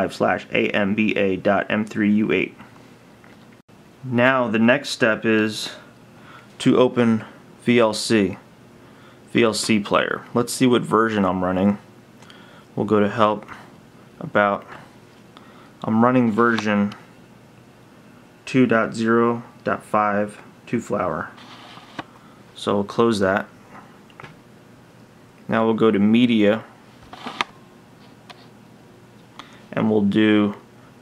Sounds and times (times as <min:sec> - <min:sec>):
Speech: 0:00.0 - 0:02.7, 0:04.0 - 0:05.9, 0:06.6 - 0:08.5, 0:09.3 - 0:11.9, 0:12.8 - 0:14.8, 0:15.8 - 0:17.0, 0:18.4 - 0:21.4, 0:22.6 - 0:23.5, 0:25.5 - 0:26.7, 0:29.7 - 0:30.7
Inside, small room: 0:00.0 - 0:31.0.